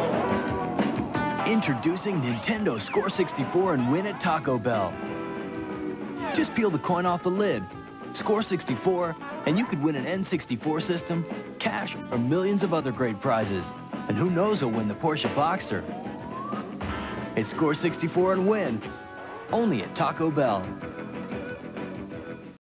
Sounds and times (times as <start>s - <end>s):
Music: 0.0s - 22.6s
Speech: 1.4s - 5.0s, 6.3s - 15.9s, 17.4s - 18.9s, 19.5s - 20.8s.